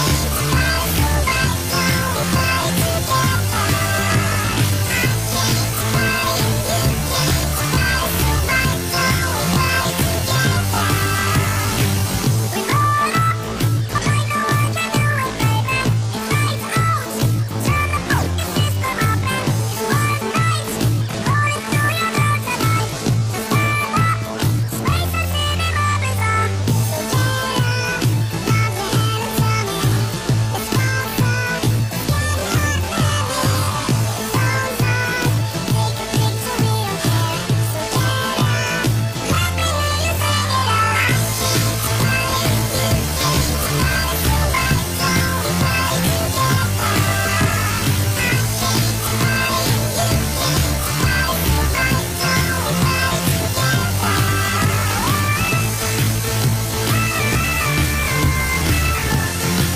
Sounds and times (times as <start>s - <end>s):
Music: 0.0s - 59.7s.